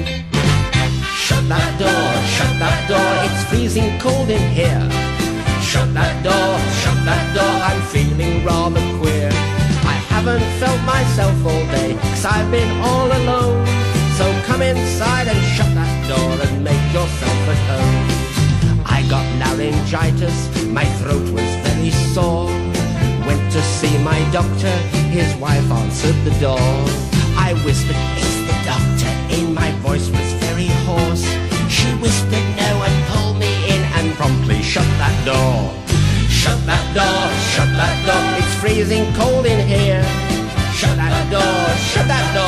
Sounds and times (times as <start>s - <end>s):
Music: 0.0s - 42.4s.